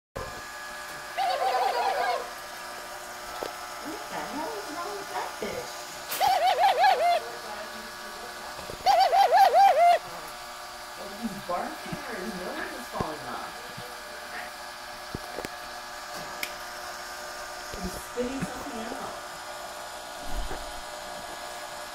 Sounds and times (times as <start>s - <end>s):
Pigeon, dove: 1.2s - 2.3s, 6.1s - 7.2s, 8.8s - 10.0s.